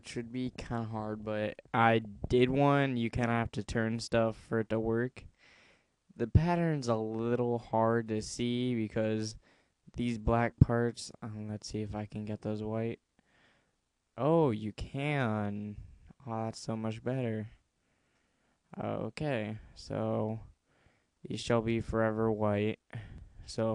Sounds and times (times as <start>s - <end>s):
Speech: 0.0s - 5.3s, 6.2s - 9.4s, 10.0s - 13.0s, 14.2s - 17.6s, 18.7s - 20.5s, 21.3s - 23.7s.